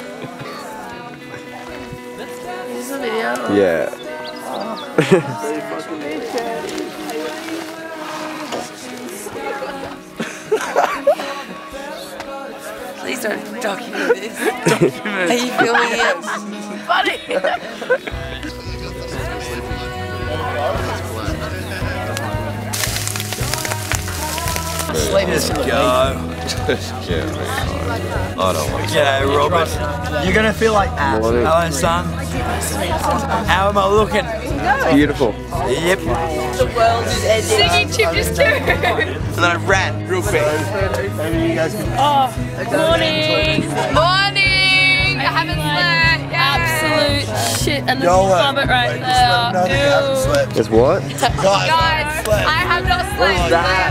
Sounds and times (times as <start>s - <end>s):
Music: 0.0s - 53.9s.